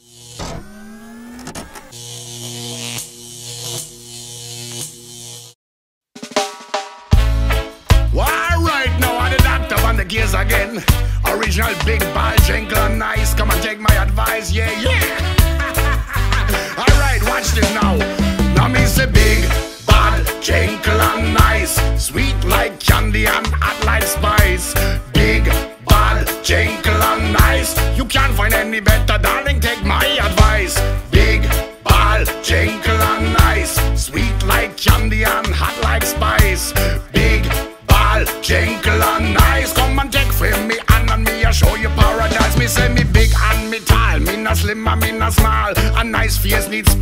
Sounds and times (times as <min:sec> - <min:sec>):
Music: 0:06.2 - 0:47.0.